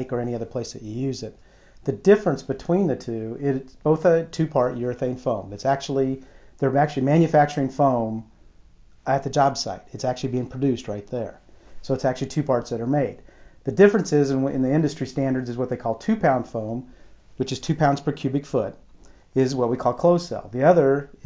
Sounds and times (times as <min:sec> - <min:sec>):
Speech: 0:00.0 - 0:08.3, 0:09.1 - 0:18.8, 0:19.4 - 0:21.2.